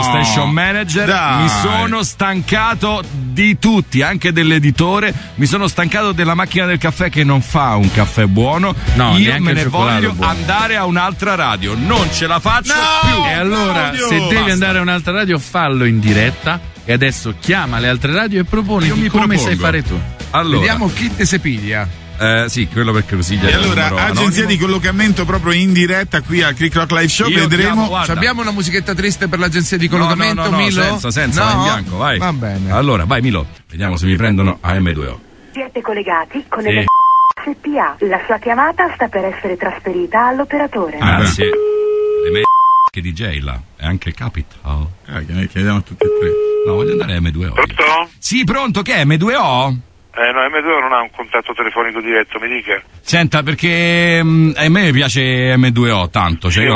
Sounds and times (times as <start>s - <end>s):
Music: 0.0s - 33.7s
Speech: 0.0s - 41.6s, 42.3s - 56.7s.